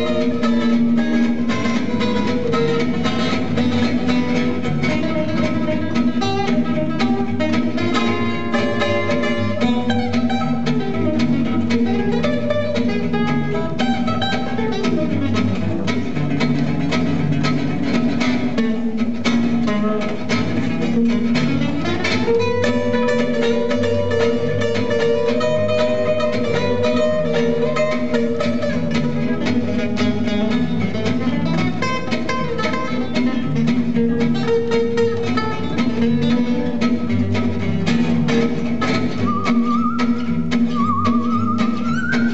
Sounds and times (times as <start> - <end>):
Bowed string instrument: 0.0 - 42.3
Guitar: 0.0 - 42.3.